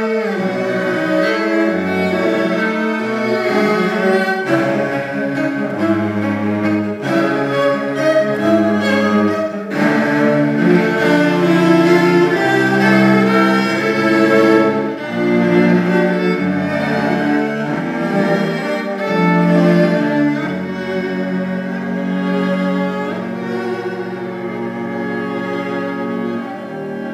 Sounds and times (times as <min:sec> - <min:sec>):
Cello: 0:00.0 - 0:27.1
String section: 0:00.0 - 0:27.1.